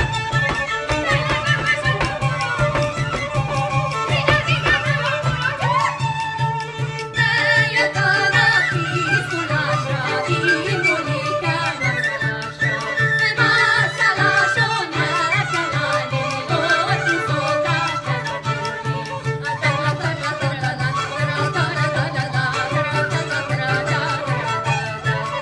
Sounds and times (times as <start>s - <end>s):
Middle Eastern music: 0.0s - 25.4s
Violin, fiddle: 0.0s - 25.4s
Singing: 7.2s - 25.4s.